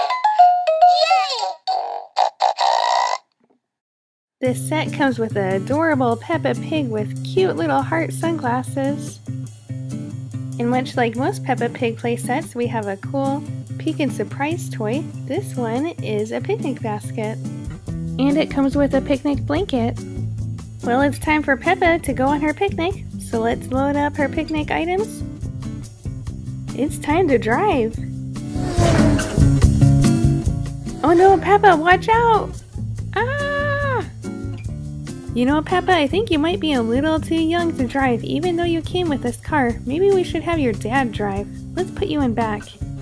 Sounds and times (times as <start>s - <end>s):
Speech: 4.4s - 9.2s, 10.6s - 17.4s, 18.2s - 20.0s, 20.8s - 25.2s, 26.8s - 28.0s, 31.0s - 32.5s, 35.4s - 42.7s
Music: 4.4s - 43.0s.